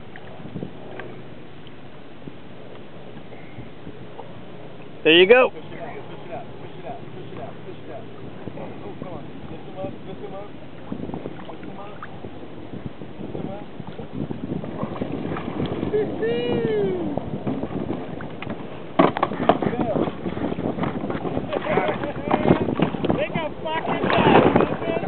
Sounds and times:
Rowboat, canoe, kayak: 0.0s - 25.0s.

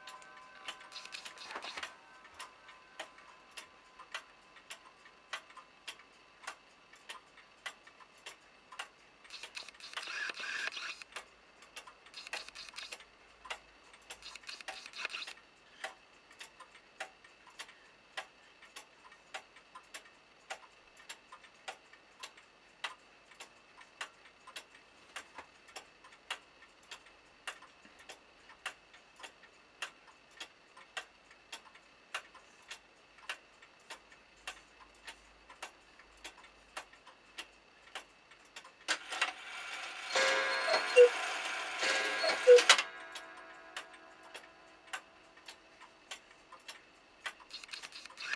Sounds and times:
Tick-tock: 0.0s - 48.3s
Tick: 15.8s - 38.9s.

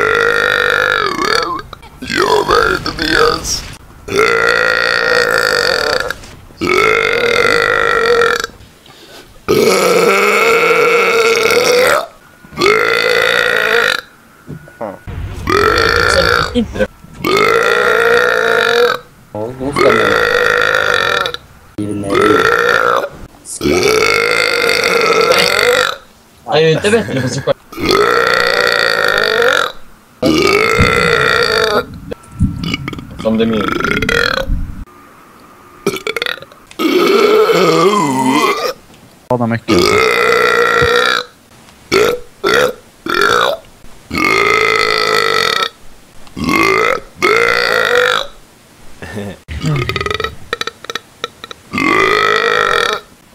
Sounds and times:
Burping, eructation: 0.0s - 3.4s, 4.1s - 8.6s, 9.5s - 21.5s, 22.1s - 26.1s, 26.9s - 34.6s, 35.8s - 38.8s, 39.7s - 45.8s, 46.4s - 48.4s, 49.5s - 53.1s.

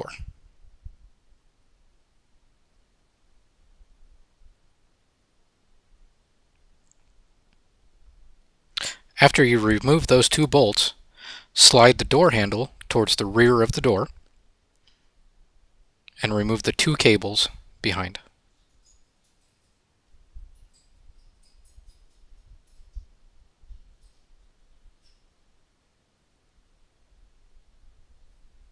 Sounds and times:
Speech: 0.0s - 0.3s, 8.8s - 11.0s, 11.6s - 14.2s, 16.1s - 18.3s.

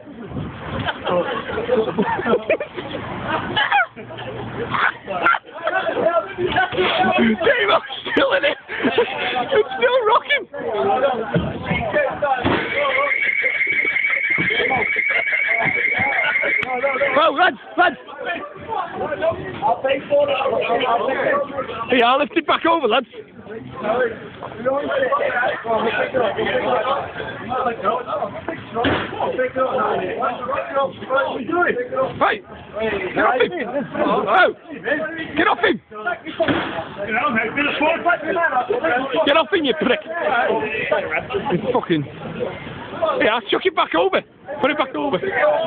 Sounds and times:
Speech: 15.5s - 45.6s.

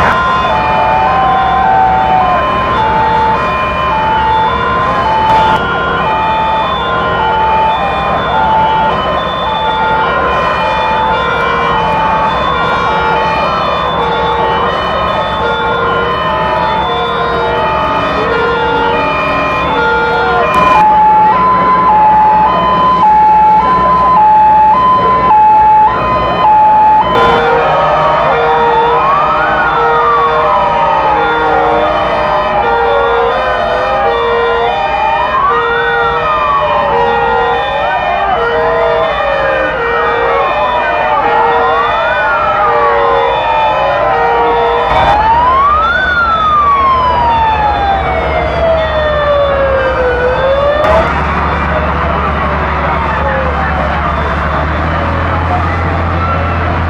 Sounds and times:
Fire engine, fire truck (siren): 0.0s - 56.9s.

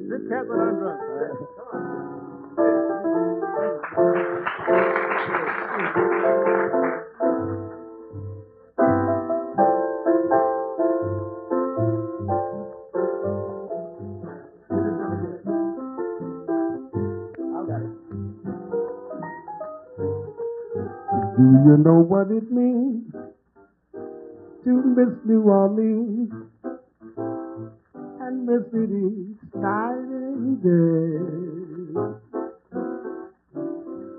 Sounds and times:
Speech: 0.0s - 2.2s, 5.2s - 6.0s, 17.4s - 17.9s
Music: 0.0s - 34.1s.

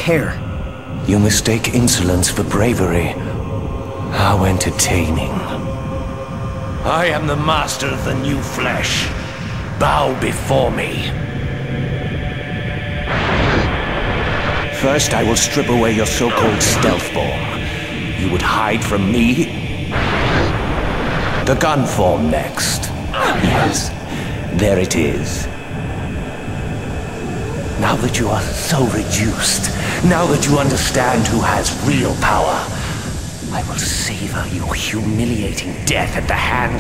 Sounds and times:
Speech: 0.0s - 0.4s, 1.0s - 3.4s, 4.1s - 5.6s, 6.8s - 11.2s, 14.8s - 19.6s, 21.5s - 25.5s, 27.8s - 36.8s.

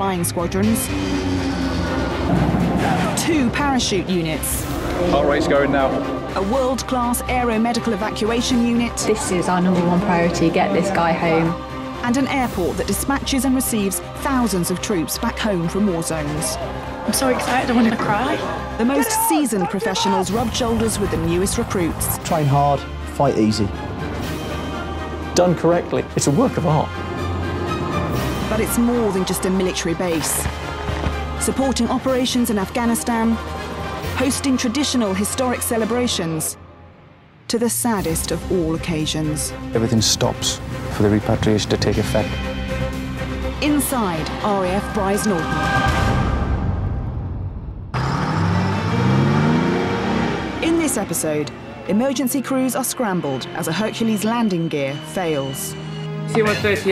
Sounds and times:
Music: 0.0s - 56.9s.

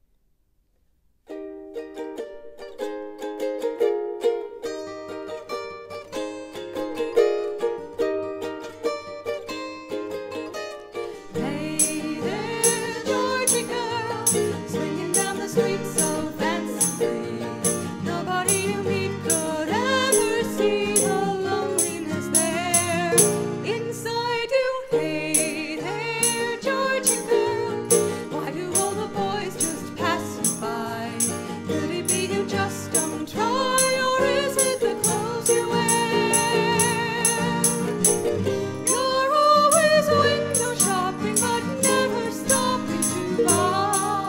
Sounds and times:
Musical instrument: 2.2s - 24.0s, 24.9s - 44.2s.

